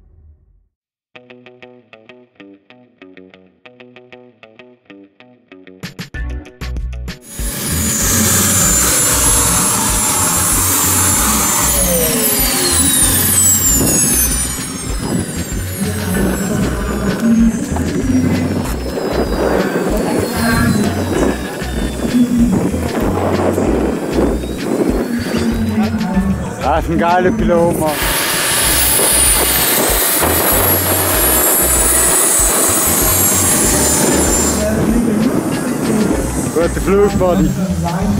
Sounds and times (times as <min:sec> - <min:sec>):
Music: 0:01.2 - 0:12.1, 0:12.8 - 0:38.1
Aircraft engine: 0:07.2 - 0:38.1
Fixed-wing aircraft, airplane: 0:07.2 - 0:38.1
Outside, rural or natural: 0:07.2 - 0:38.1
Speech: 0:19.8 - 0:21.9, 0:25.4 - 0:28.0, 0:34.6 - 0:38.1.